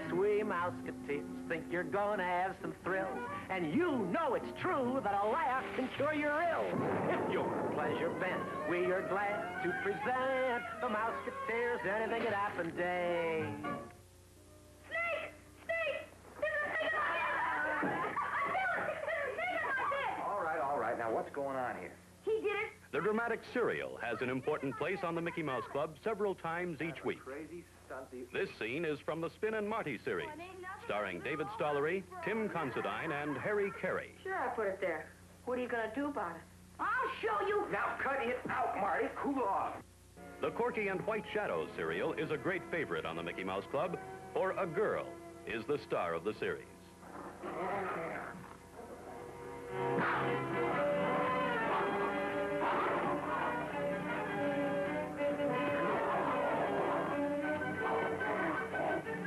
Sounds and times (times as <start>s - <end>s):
Music: 0.0s - 15.8s, 40.2s - 59.2s.